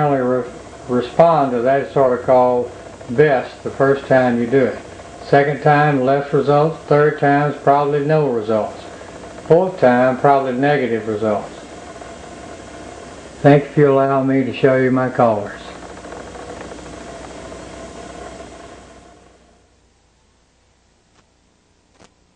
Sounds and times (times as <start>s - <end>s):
Speech: 0.0s - 11.7s, 13.4s - 15.8s.